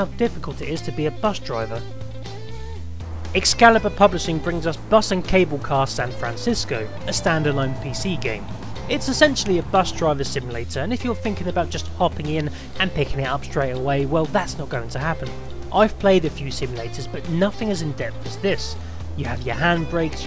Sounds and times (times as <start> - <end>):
Speech: 0.0 - 1.9, 3.4 - 20.2
Music: 0.0 - 20.2.